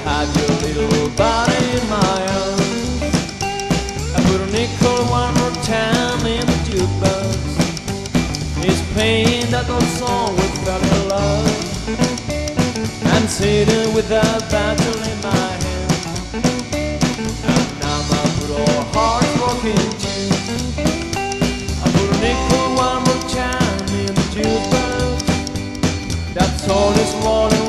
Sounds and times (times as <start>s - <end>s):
Music: 0.0s - 27.6s.